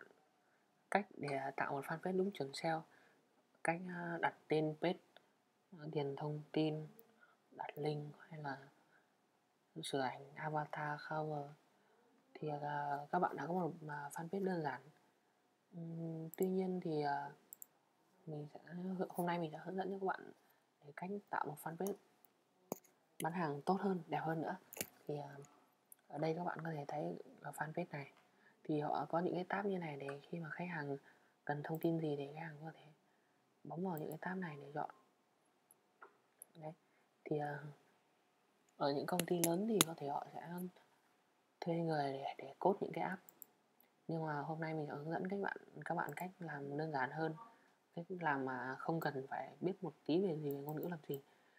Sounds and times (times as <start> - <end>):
Speech: 0.9 - 2.9, 3.6 - 5.0, 5.8 - 7.0, 7.6 - 8.8, 9.8 - 11.6, 12.3 - 15.0, 15.8 - 17.4, 18.3 - 22.0, 23.2 - 25.5, 26.1 - 33.0, 33.7 - 35.0, 36.6 - 37.8, 38.8 - 40.8, 41.6 - 43.3, 44.1 - 51.3.